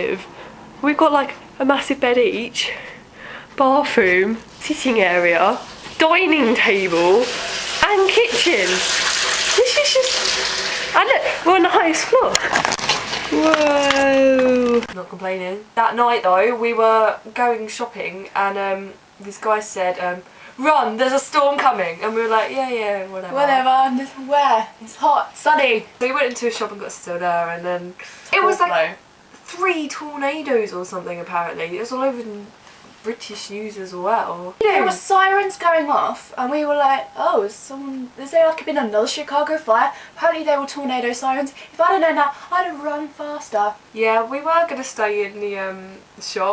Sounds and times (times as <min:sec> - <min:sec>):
Speech: 0:00.0 - 0:02.8, 0:03.6 - 0:08.8, 0:09.6 - 0:10.2, 0:11.0 - 0:12.4, 0:13.3 - 0:46.5
Inside, small room: 0:00.0 - 0:46.5.